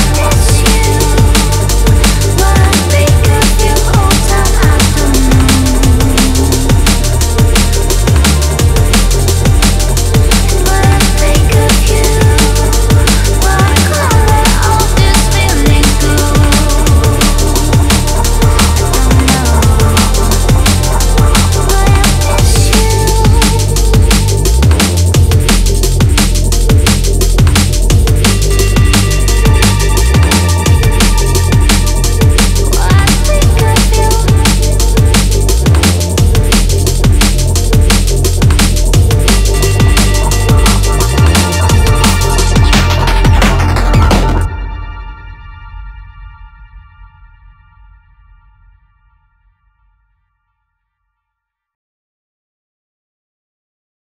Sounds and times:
Drum and bass: 0.0 - 46.4.

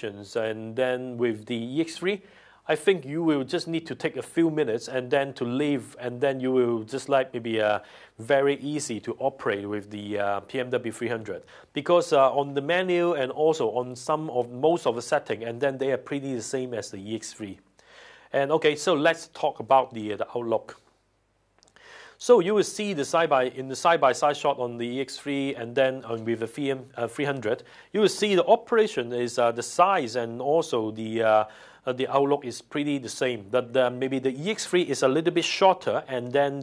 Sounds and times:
Speech: 0.0 - 17.6, 18.3 - 20.9, 22.2 - 36.6.

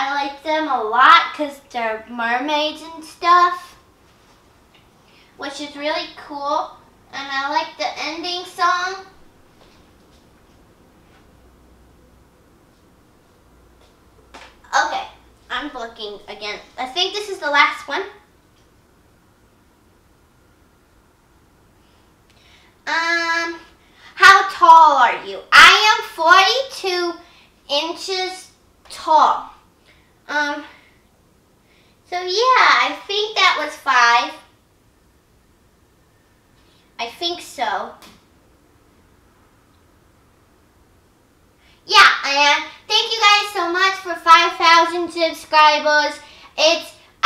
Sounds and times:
Child speech, kid speaking: 0.0 - 3.8, 5.4 - 9.2, 14.7 - 18.3, 22.9 - 29.6, 30.3 - 30.8, 32.1 - 34.6, 37.0 - 38.0, 41.9 - 47.2
Inside, small room: 0.0 - 47.2.

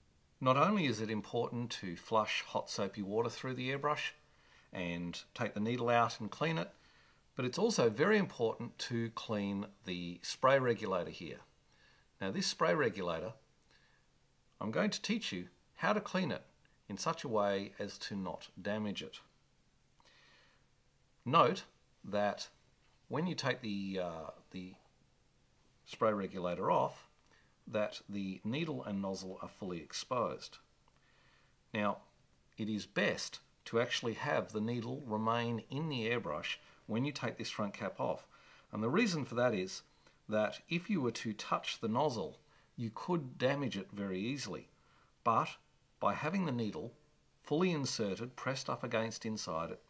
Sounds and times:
Speech: 0.4 - 6.8, 7.4 - 11.5, 12.2 - 13.4, 14.6 - 19.3, 21.2 - 24.9, 25.8 - 30.7, 31.7 - 49.8.

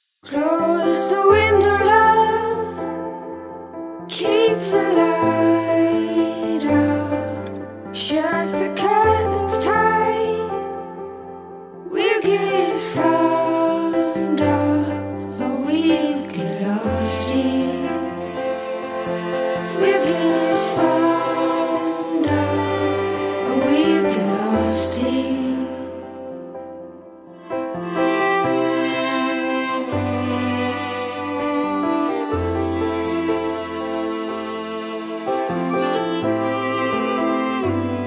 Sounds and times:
Music: 0.0 - 38.0.

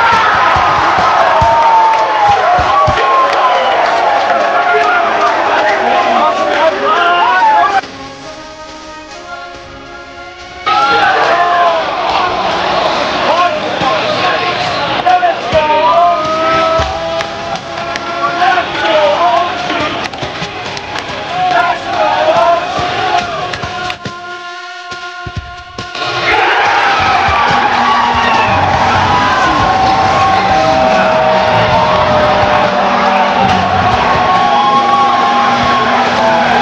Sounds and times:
Cheering: 0.0 - 7.8, 9.5 - 24.4, 25.8 - 36.6
Music: 0.0 - 36.6.

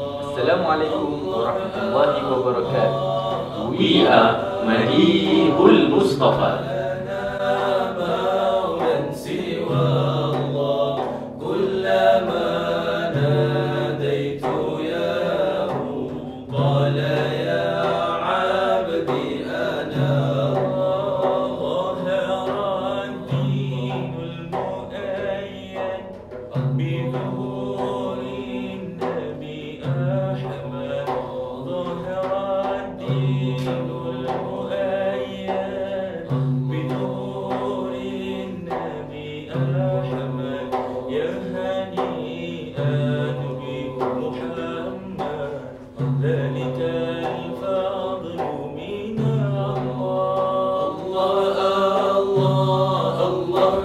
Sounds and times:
Chant: 0.0 - 53.8.

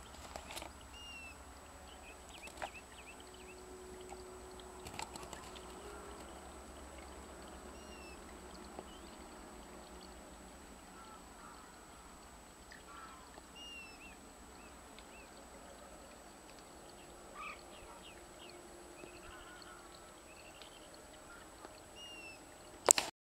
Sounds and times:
Bird: 0.0 - 22.9.

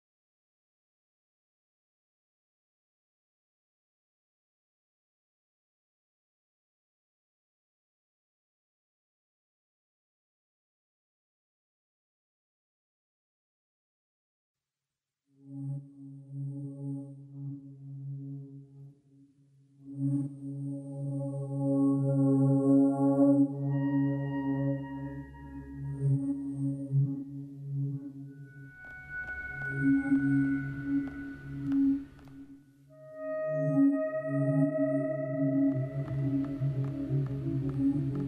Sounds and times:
Music: 15.2 - 38.2.

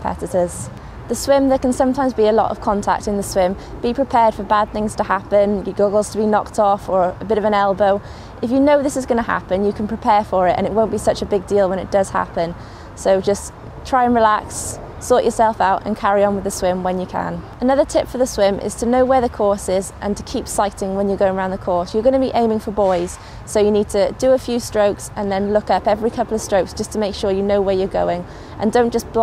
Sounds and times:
Speech: 0.0 - 29.2.

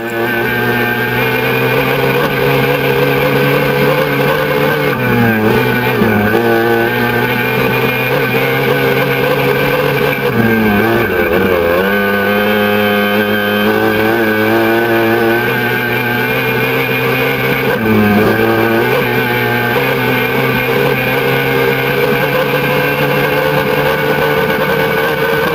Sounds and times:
Motorboat, speedboat: 0.0 - 25.5.

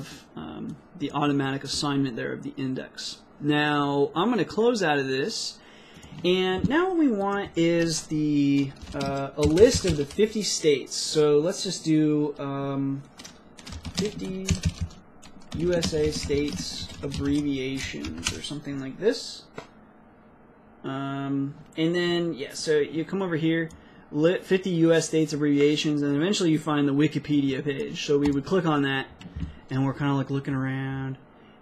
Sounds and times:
Typing: 7.2 - 10.3, 13.2 - 18.4.

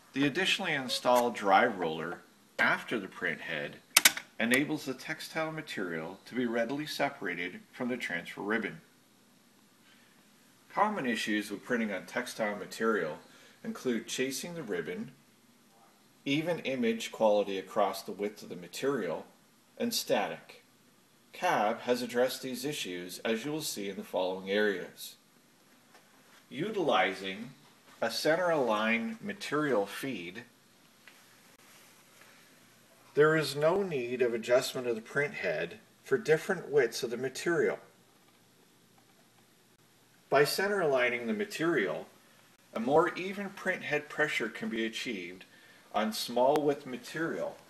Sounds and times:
Speech: 0.1 - 8.9, 10.7 - 15.2, 16.2 - 20.7, 21.3 - 25.2, 26.5 - 30.5, 33.1 - 38.0, 40.3 - 47.7.

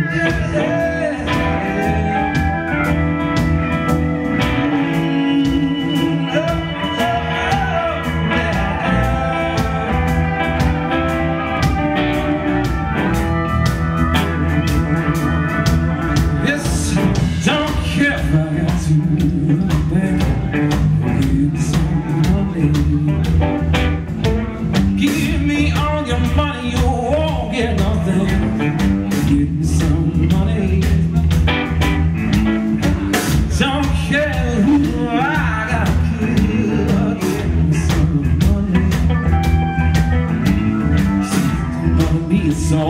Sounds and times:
Music: 0.0 - 42.8.

